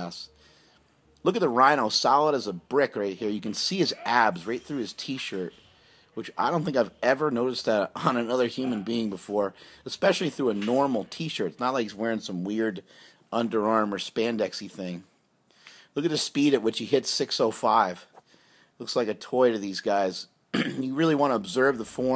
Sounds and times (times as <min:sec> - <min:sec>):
Speech: 0:00.0 - 0:00.4, 0:01.2 - 0:15.1, 0:16.0 - 0:18.1, 0:18.8 - 0:22.1.